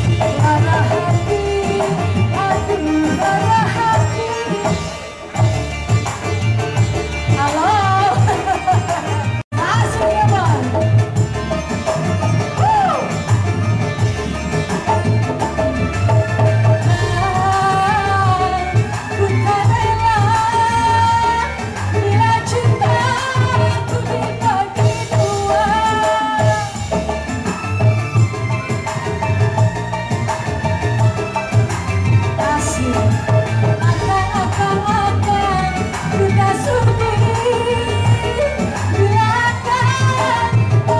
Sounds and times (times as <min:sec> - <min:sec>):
Music of Asia: 0:00.0 - 0:41.0.